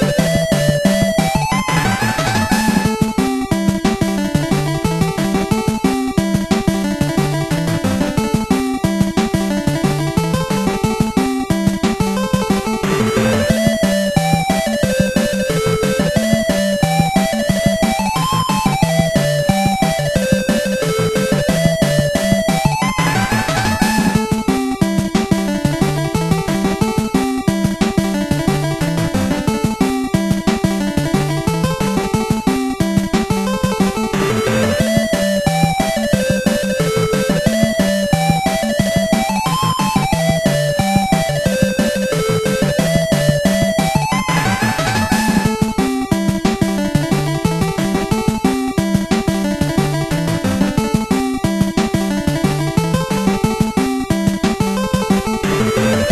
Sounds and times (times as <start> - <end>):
Music: 0.0 - 56.1.